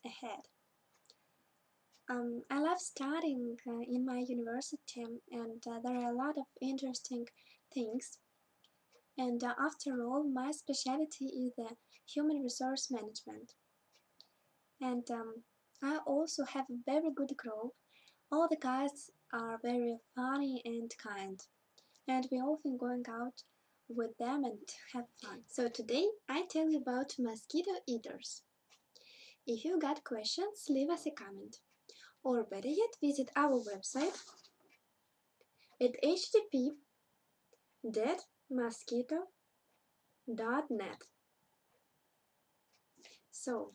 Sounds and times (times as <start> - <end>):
Speech: 0.0 - 0.5, 2.1 - 8.2, 9.2 - 13.5, 14.8 - 21.5, 22.1 - 28.4, 29.5 - 31.6, 32.2 - 34.5, 35.8 - 36.8, 37.8 - 39.3, 40.3 - 41.2, 43.4 - 43.7.